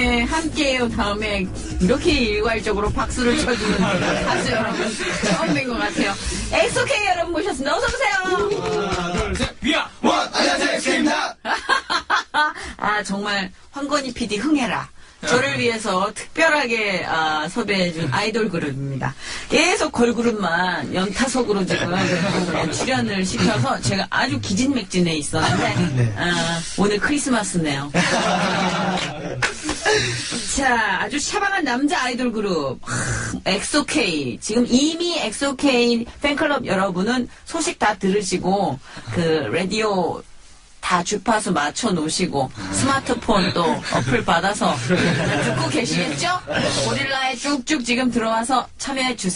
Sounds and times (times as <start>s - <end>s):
Speech: 0.0s - 11.4s, 12.8s - 28.0s, 33.4s - 40.2s, 40.8s - 49.3s.